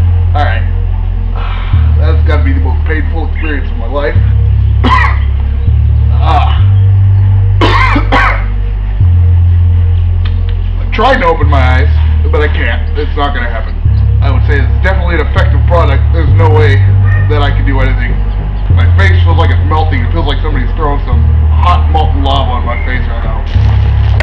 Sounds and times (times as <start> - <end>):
Music: 0.0 - 24.2
Speech: 0.4 - 0.8, 2.0 - 4.3, 6.2 - 6.7, 10.8 - 23.6.